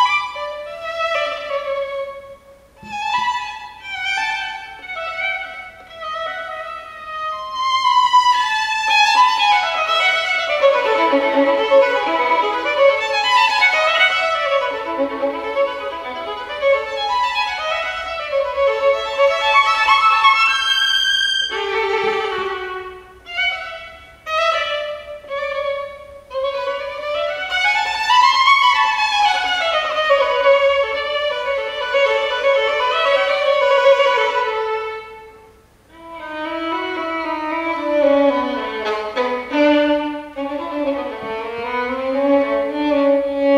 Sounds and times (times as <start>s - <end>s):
Classical music: 0.0s - 43.5s
Violin, fiddle: 0.0s - 43.5s.